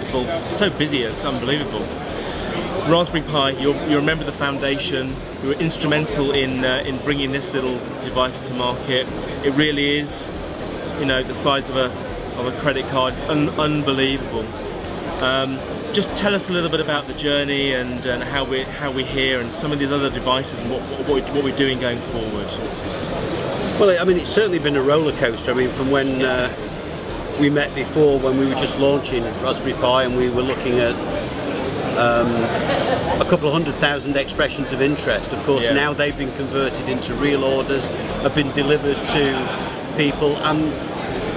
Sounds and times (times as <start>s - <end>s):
Speech: 0.0s - 2.0s, 2.6s - 10.3s, 11.0s - 14.5s, 15.2s - 22.7s, 23.8s - 26.6s, 27.4s - 31.1s, 31.9s - 40.8s
Electronica: 0.0s - 41.3s.